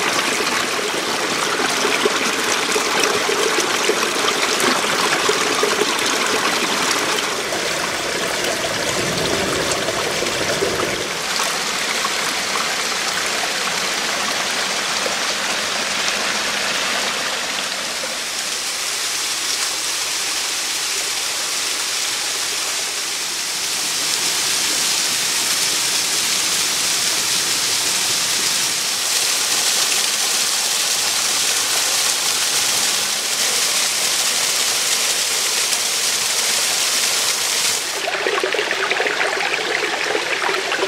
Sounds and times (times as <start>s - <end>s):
Trickle, dribble: 0.0s - 40.8s.